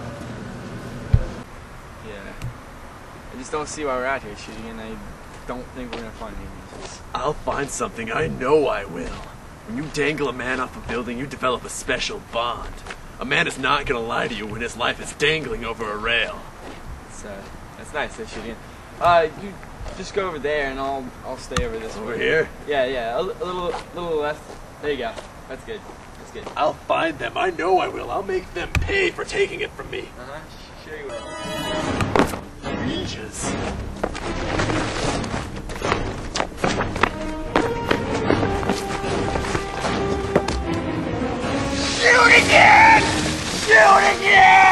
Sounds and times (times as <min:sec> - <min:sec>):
Music: 0:31.1 - 0:44.3.